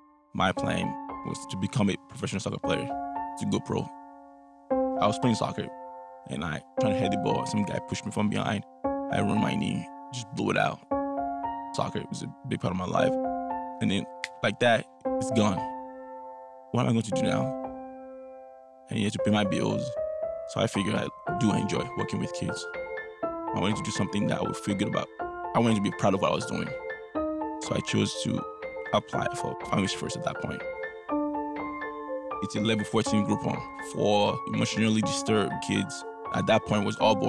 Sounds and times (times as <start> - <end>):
Music: 0.0 - 37.2
Speech: 0.4 - 3.9, 5.0 - 5.7, 6.3 - 10.8, 11.8 - 13.2, 13.8 - 15.7, 16.8 - 17.5, 18.9 - 22.7, 23.6 - 26.8, 27.6 - 28.4, 29.0 - 30.6, 32.4 - 37.2.